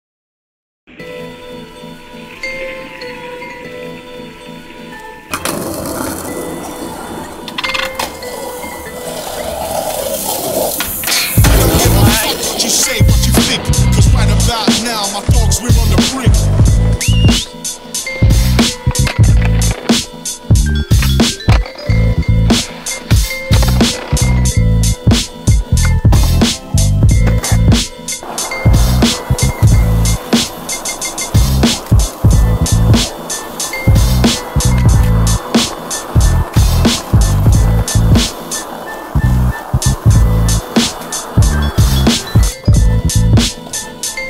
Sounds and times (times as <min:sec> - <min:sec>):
Music: 0:00.9 - 0:44.2
Skateboard: 0:05.0 - 0:44.2.